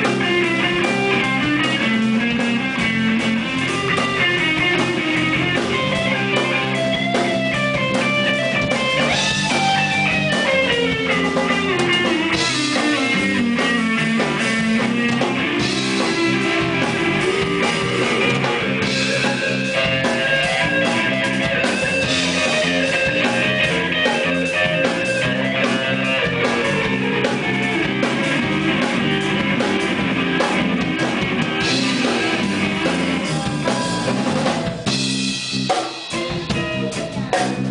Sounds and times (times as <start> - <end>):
Electric guitar: 0.0 - 37.7.